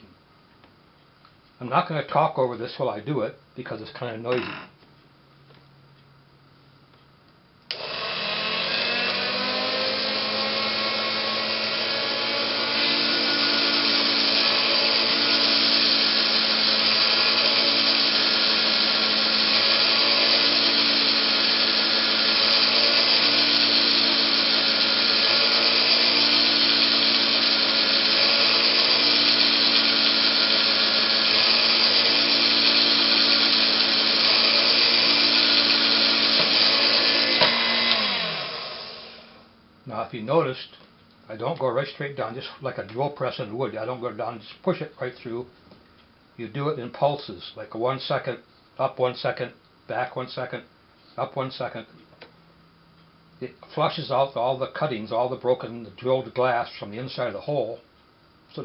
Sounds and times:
Drill: 7.7s - 39.5s.

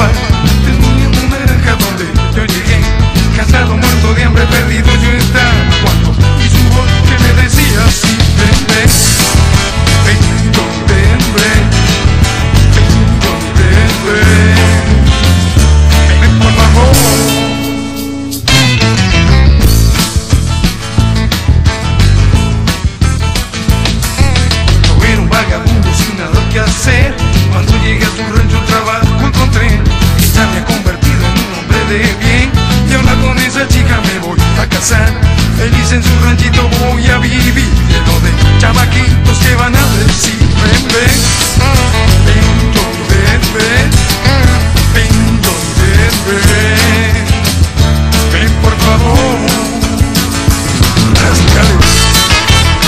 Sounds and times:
Music: 0.0s - 52.8s.

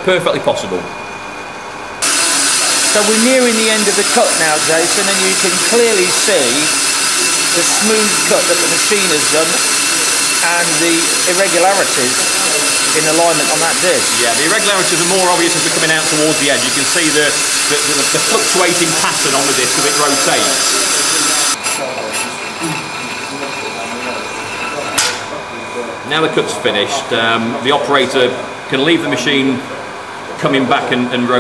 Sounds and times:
Speech: 0.0s - 0.9s, 2.9s - 31.4s
Inside, large room or hall: 1.6s - 31.4s.

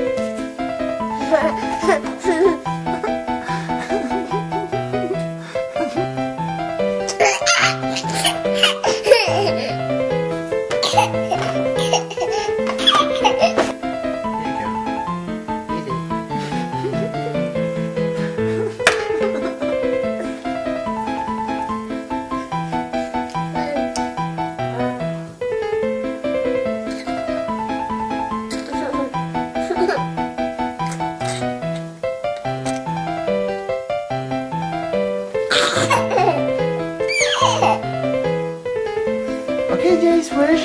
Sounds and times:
Piano: 0.0s - 40.6s.

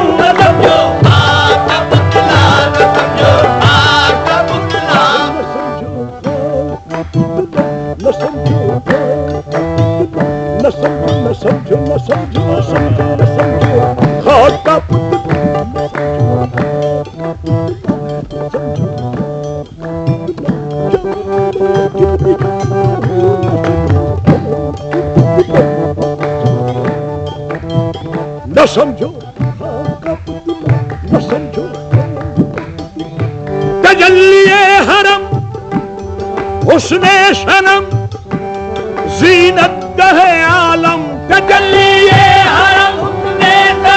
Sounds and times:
Middle Eastern music: 0.0s - 43.9s.

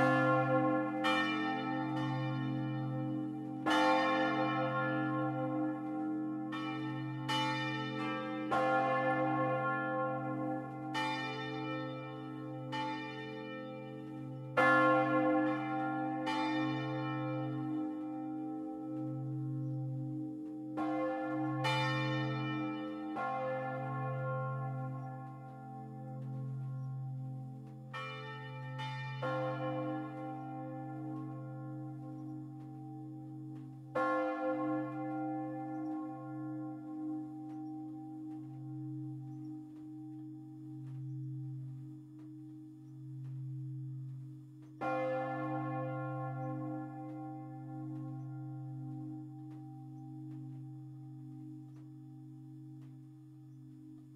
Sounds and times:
Church bell: 0.0s - 54.1s.

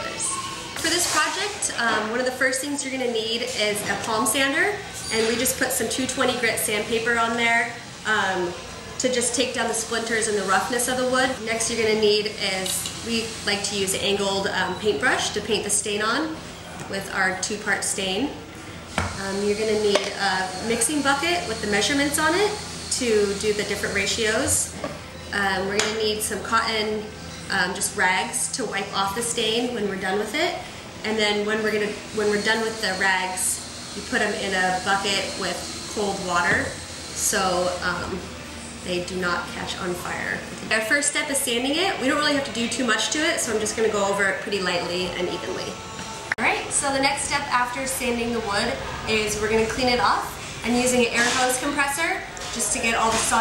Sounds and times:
Speech: 0.0s - 18.4s, 19.2s - 38.3s, 38.9s - 45.8s, 46.4s - 53.4s.

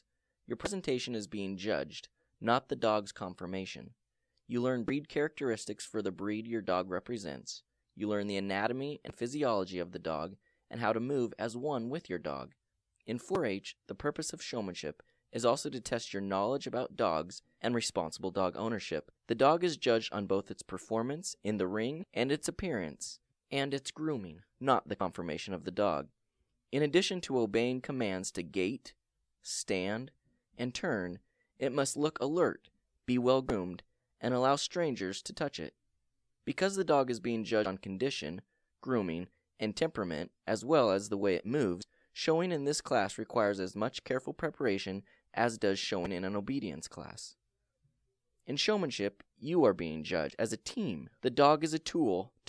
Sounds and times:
Speech: 0.0s - 35.8s, 36.5s - 47.4s, 48.5s - 52.4s.

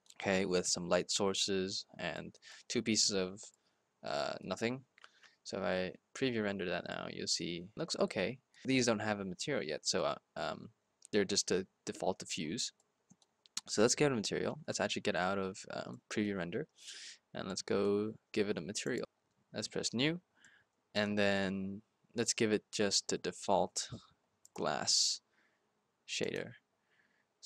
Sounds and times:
Speech: 0.2s - 3.5s, 4.1s - 4.8s, 5.5s - 10.6s, 11.2s - 12.7s, 13.6s - 20.2s, 21.0s - 24.0s, 24.6s - 25.2s, 26.1s - 26.5s.

